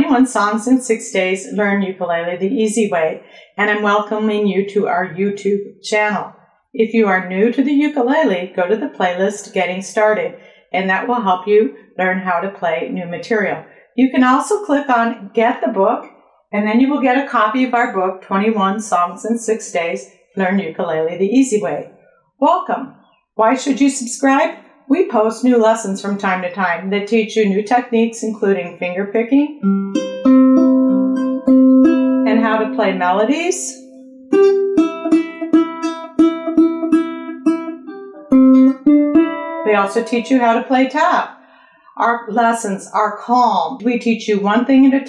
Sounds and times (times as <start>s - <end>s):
Speech: 0.0s - 29.6s, 32.3s - 33.8s, 39.7s - 41.3s, 42.0s - 45.0s
Guitar: 29.5s - 41.8s
Ukulele: 29.6s - 32.8s, 33.8s - 40.5s.